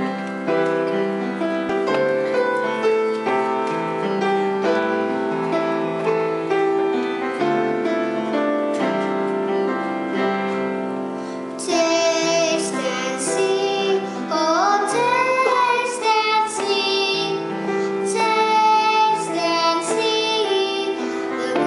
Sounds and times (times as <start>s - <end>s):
Inside, large room or hall: 0.0s - 21.6s
Music: 0.0s - 21.6s
Singing: 11.6s - 21.6s.